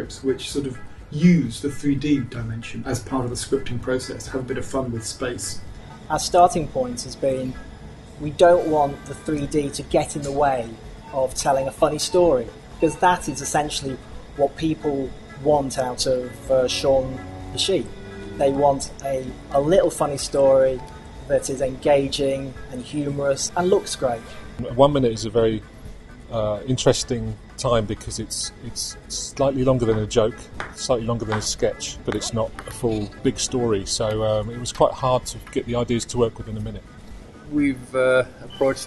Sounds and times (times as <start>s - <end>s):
Speech: 0.0s - 7.6s, 8.2s - 25.6s, 26.3s - 36.8s, 37.5s - 38.8s
Music: 0.0s - 38.8s.